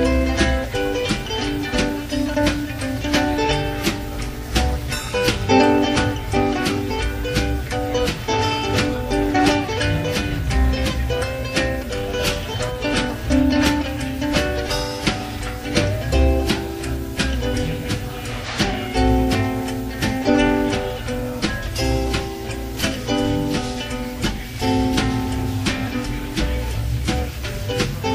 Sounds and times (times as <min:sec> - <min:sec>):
Music: 0:00.0 - 0:28.1.